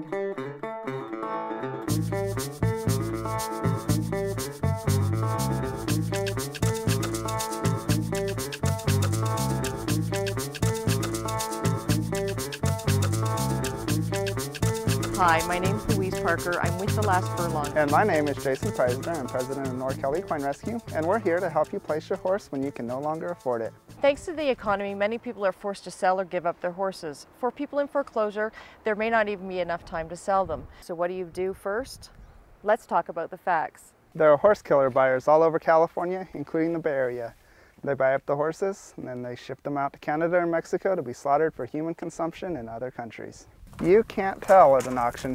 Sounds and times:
Speech: 15.2 - 32.1, 32.7 - 45.3.

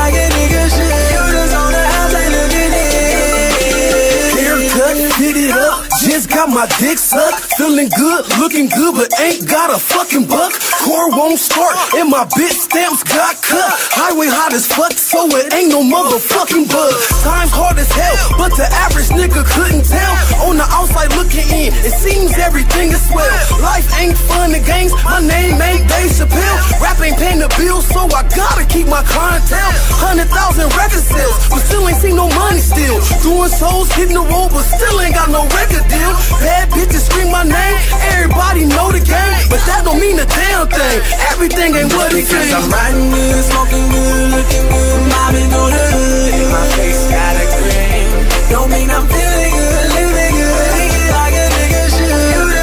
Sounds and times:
Hip hop music: 0.0 - 52.6.

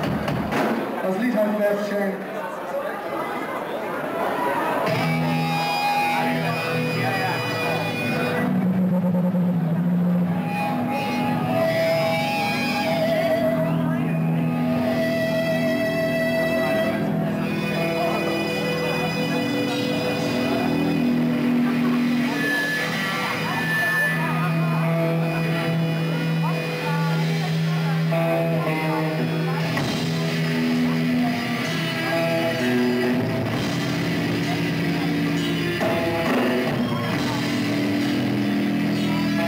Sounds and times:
Music: 0.0 - 1.4, 4.8 - 39.4
Speech: 1.0 - 5.0, 5.6 - 8.5, 16.6 - 32.8, 34.3 - 37.9.

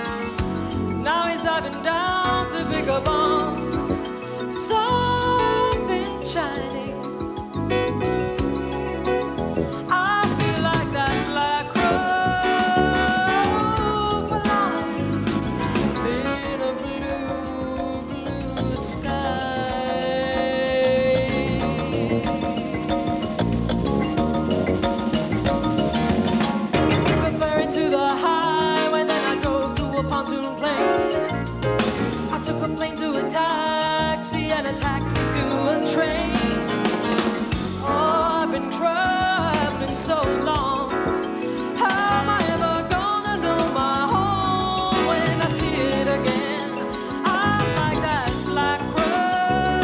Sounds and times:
Music: 0.0 - 49.8.

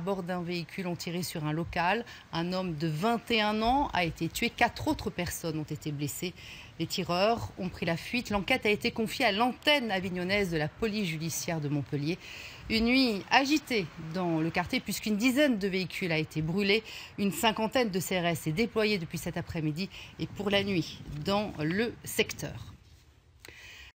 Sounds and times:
Speech: 0.0 - 22.8.

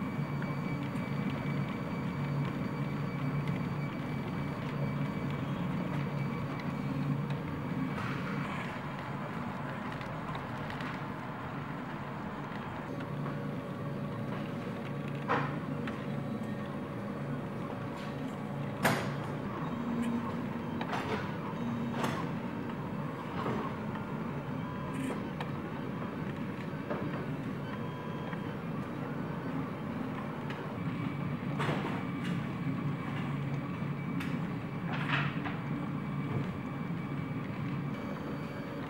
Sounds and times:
Printer: 0.0 - 38.9.

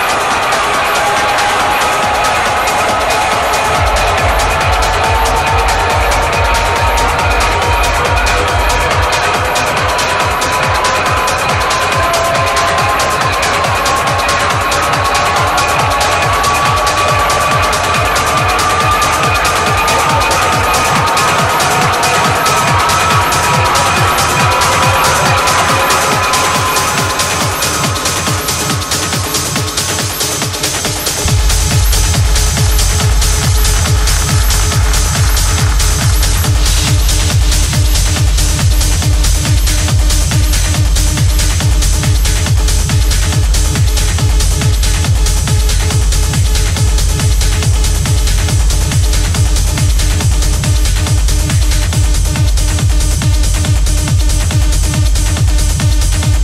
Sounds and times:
Techno: 0.0 - 56.4.

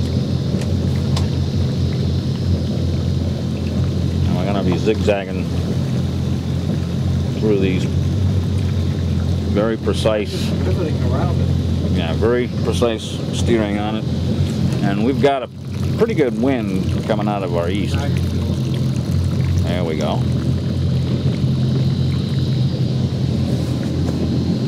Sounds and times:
Motorboat, speedboat: 0.0 - 24.6
Speech: 4.2 - 5.5, 9.5 - 14.1, 14.8 - 18.2, 19.6 - 20.3.

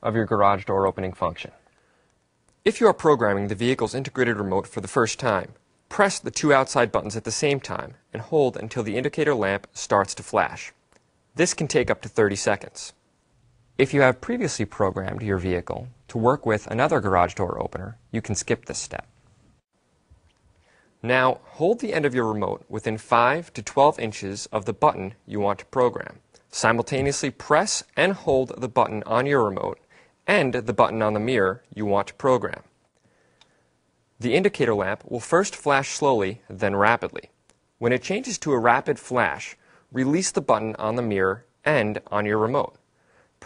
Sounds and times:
Speech: 0.0 - 1.6, 2.6 - 10.8, 11.4 - 13.0, 13.8 - 19.1, 21.0 - 32.7, 34.2 - 42.8.

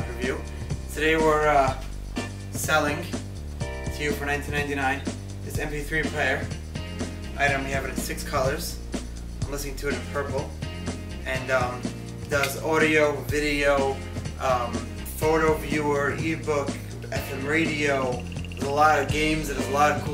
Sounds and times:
Speech: 0.0 - 1.9, 2.6 - 3.2, 3.9 - 6.5, 7.4 - 8.8, 9.4 - 10.5, 11.2 - 20.1
Music: 0.0 - 20.1.

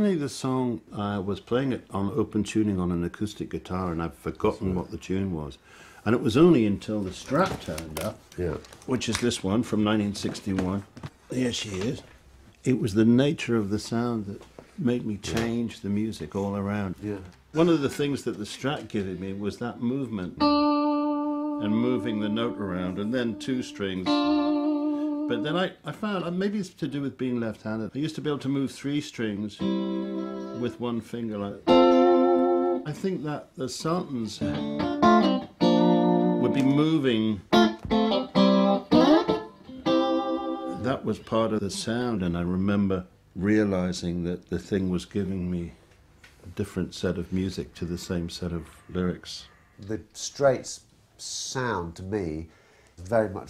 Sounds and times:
Speech: 0.0 - 20.4, 21.6 - 24.2, 25.3 - 29.7, 30.5 - 31.7, 32.9 - 34.6, 36.4 - 37.4, 40.8 - 45.8, 46.4 - 53.4.

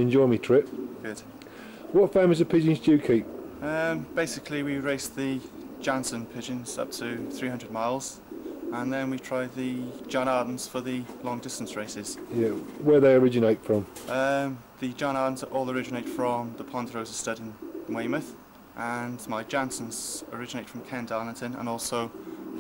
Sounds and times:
Speech: 0.0 - 1.3, 2.0 - 8.2, 8.8 - 22.1
Coo: 0.3 - 12.8, 15.7 - 16.9, 17.5 - 18.4, 19.5 - 22.6.

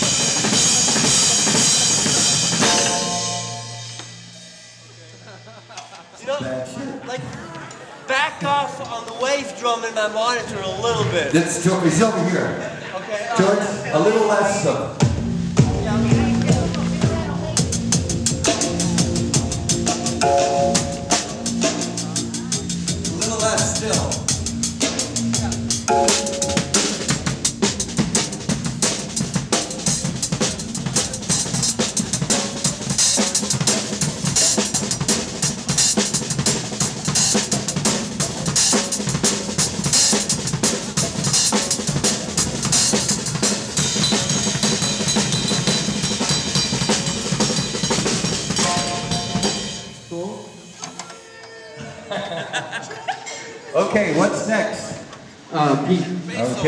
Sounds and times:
Music: 0.0 - 6.9, 13.6 - 51.2
Speech: 6.2 - 15.0, 15.7 - 17.7, 22.0 - 24.3.

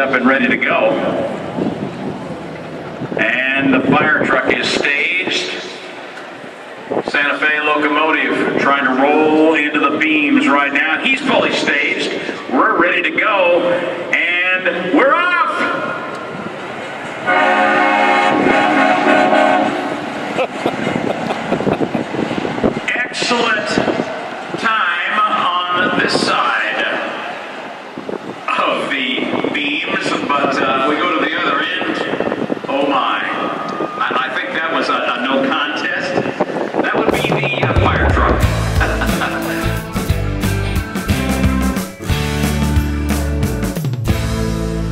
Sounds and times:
Speech: 0.0 - 1.2, 3.2 - 5.8, 7.0 - 15.9, 22.9 - 24.0, 24.6 - 27.2, 28.5 - 38.4.

